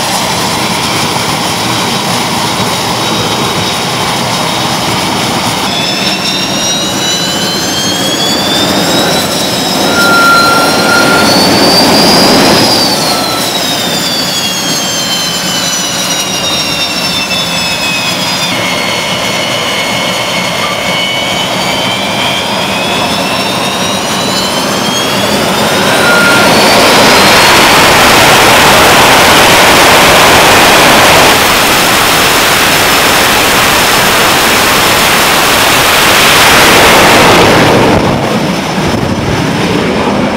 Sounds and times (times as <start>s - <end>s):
Fixed-wing aircraft, airplane: 0.0s - 40.3s.